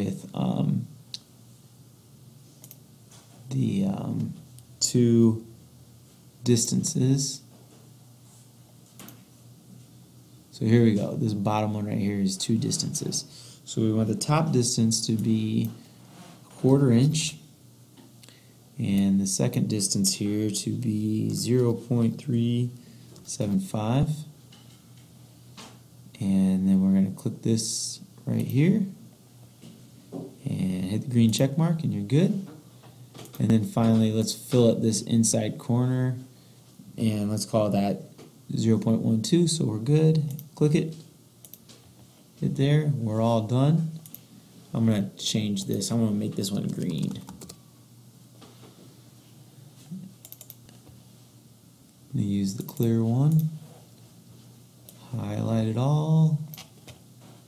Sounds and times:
Computer keyboard: 46.6 - 47.6, 50.2 - 50.6.

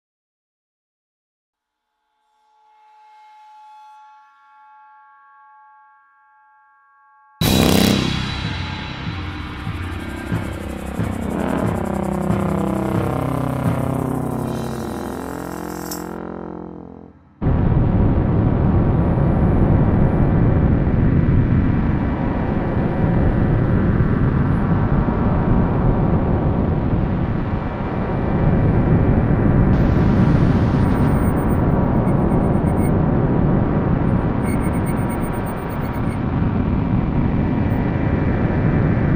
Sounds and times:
White noise: 29.8 - 32.9.

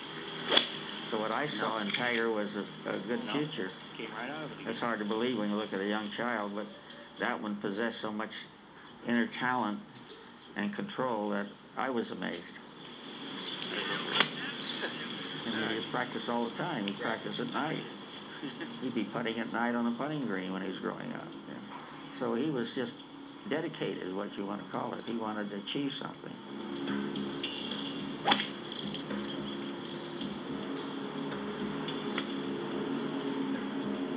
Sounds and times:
Music: 0.0 - 7.2, 12.9 - 34.1
Speech: 1.1 - 12.6, 13.7 - 26.4.

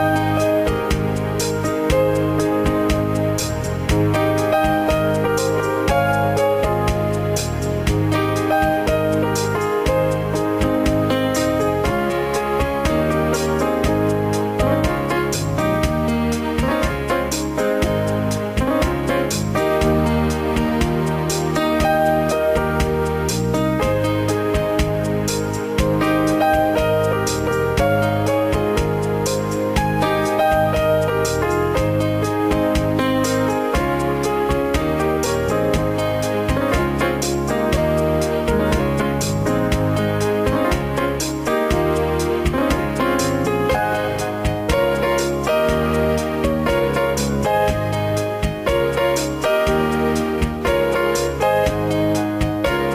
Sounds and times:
Electric piano: 0.0 - 52.9.

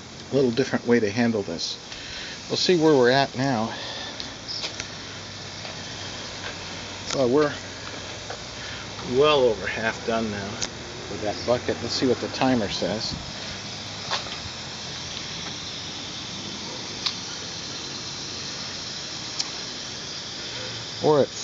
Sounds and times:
Speech: 0.3 - 1.8, 2.5 - 3.9, 7.1 - 7.6, 9.0 - 13.2, 21.0 - 21.4.

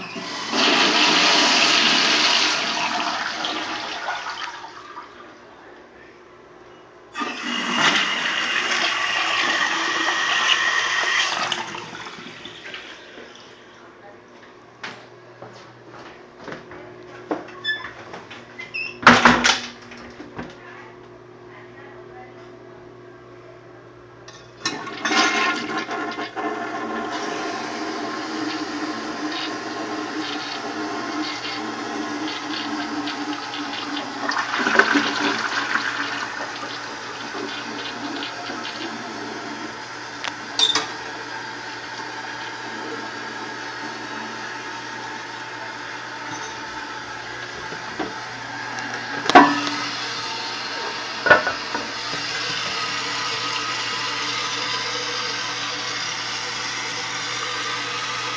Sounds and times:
Toilet flush: 0.0 - 5.4, 7.1 - 13.7, 24.6 - 58.3.

